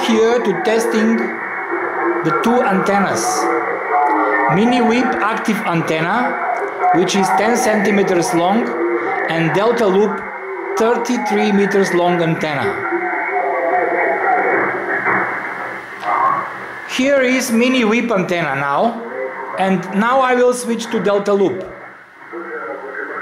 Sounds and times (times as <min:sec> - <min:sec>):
Speech: 0:00.0 - 0:01.4, 0:02.2 - 0:13.0, 0:16.0 - 0:23.2.